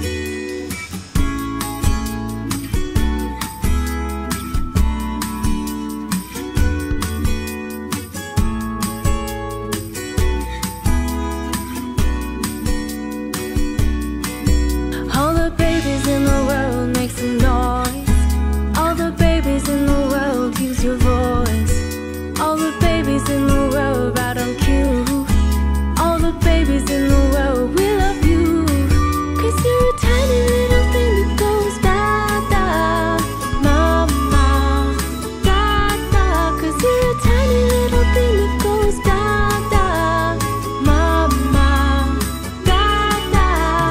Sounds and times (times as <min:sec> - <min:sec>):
Happy music: 0:00.0 - 0:43.9.